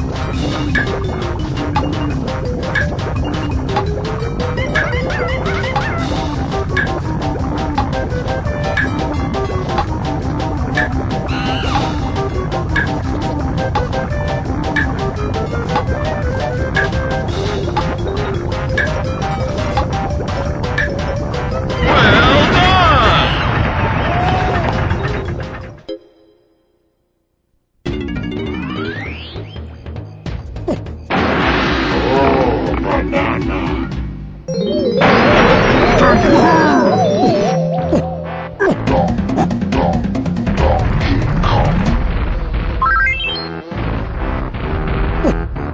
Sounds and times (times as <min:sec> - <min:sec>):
Music: 0:00.0 - 0:45.7.